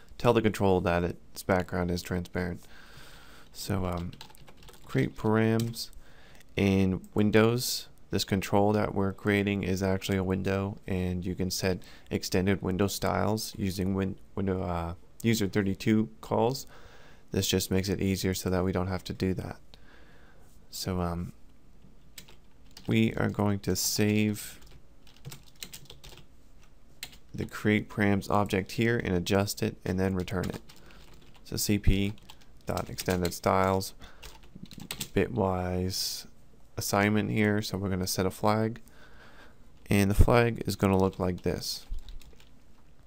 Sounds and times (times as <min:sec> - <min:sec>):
Speech: 0:00.2 - 0:02.6, 0:03.6 - 0:04.2, 0:04.8 - 0:06.0, 0:06.6 - 0:16.7, 0:17.3 - 0:19.6, 0:20.7 - 0:21.4, 0:22.9 - 0:24.6, 0:27.4 - 0:30.6, 0:31.4 - 0:34.0, 0:35.0 - 0:38.8, 0:39.8 - 0:41.9
Computer keyboard: 0:03.9 - 0:04.9, 0:22.2 - 0:22.9, 0:24.6 - 0:26.2, 0:30.2 - 0:31.4, 0:34.2 - 0:35.1, 0:41.4 - 0:42.5.